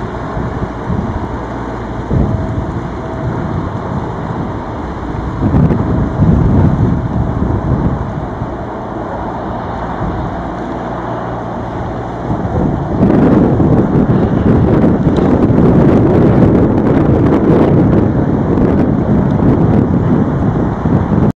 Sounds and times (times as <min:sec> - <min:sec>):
Sailboat, sailing ship: 0:00.0 - 0:21.3.